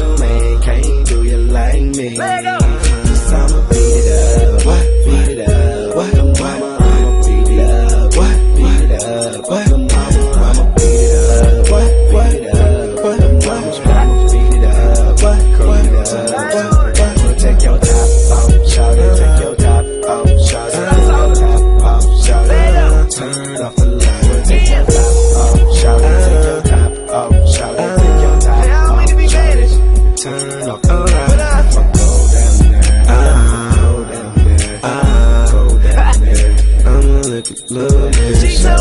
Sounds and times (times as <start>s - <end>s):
Music: 0.0s - 38.8s.